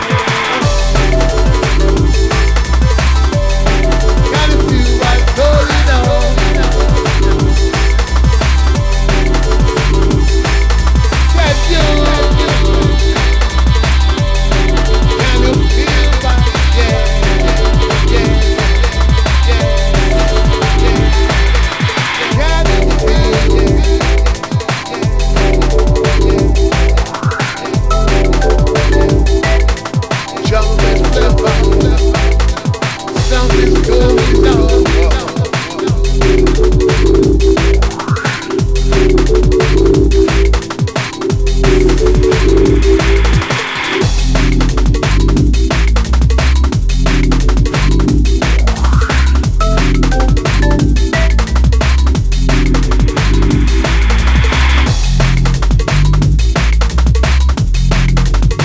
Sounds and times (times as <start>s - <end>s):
Electronic music: 0.0s - 58.6s
Exciting music: 0.0s - 58.6s
Singing: 4.2s - 8.0s, 11.2s - 25.0s, 30.2s - 36.6s.